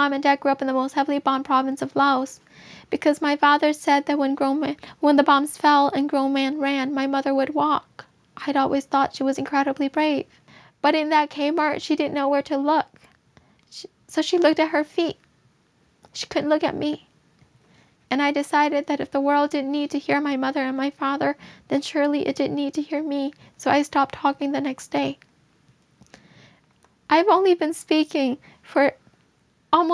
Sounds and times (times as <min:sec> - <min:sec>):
Speech: 0:00.0 - 0:12.9, 0:13.7 - 0:15.2, 0:16.1 - 0:17.1, 0:18.1 - 0:25.2, 0:27.1 - 0:29.0, 0:29.7 - 0:29.9.